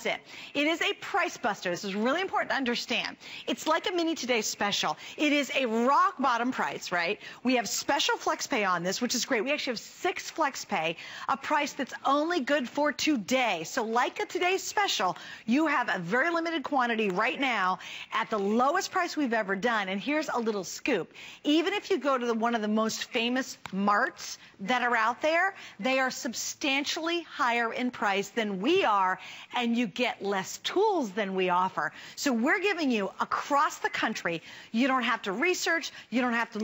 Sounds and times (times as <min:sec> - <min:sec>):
Speech: 0:00.0 - 0:36.6.